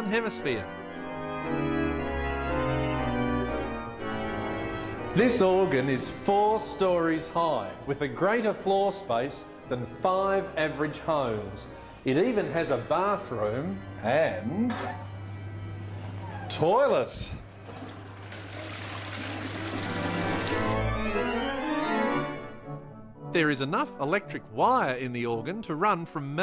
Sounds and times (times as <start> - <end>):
Speech: 0.0 - 0.7, 5.2 - 15.0, 16.5 - 17.4, 23.4 - 26.4
Musical instrument: 12.7 - 16.6.